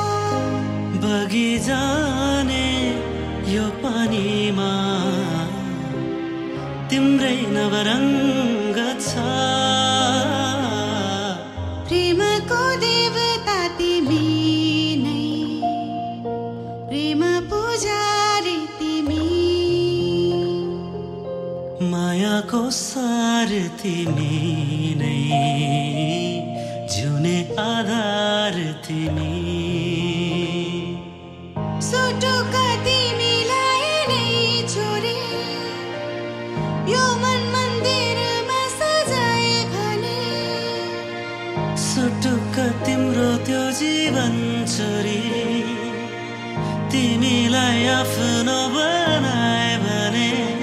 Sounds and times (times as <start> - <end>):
Music: 0.0 - 50.6.